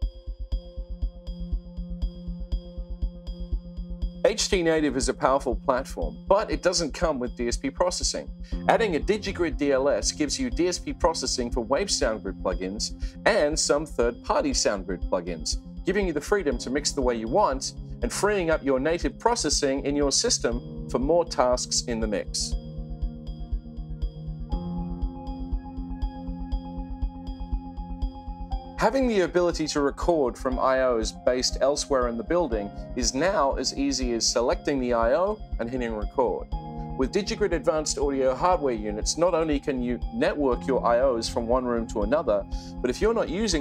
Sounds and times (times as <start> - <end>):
Music: 0.0 - 43.6
Speech: 4.3 - 22.5, 28.8 - 36.4, 37.0 - 43.6.